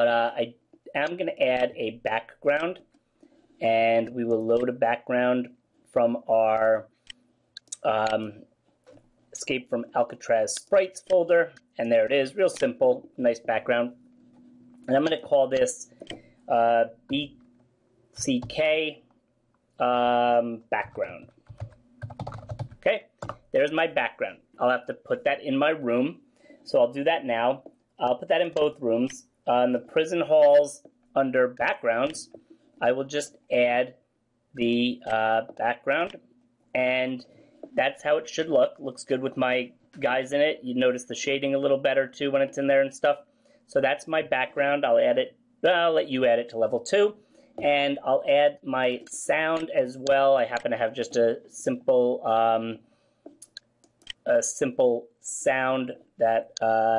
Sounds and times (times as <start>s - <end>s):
Speech: 0.0s - 2.8s, 3.6s - 6.9s, 7.6s - 8.4s, 9.4s - 14.0s, 14.9s - 15.9s, 16.5s - 17.4s, 18.2s - 19.0s, 19.8s - 21.3s, 22.8s - 34.0s, 34.6s - 36.2s, 36.8s - 52.8s, 54.2s - 56.9s.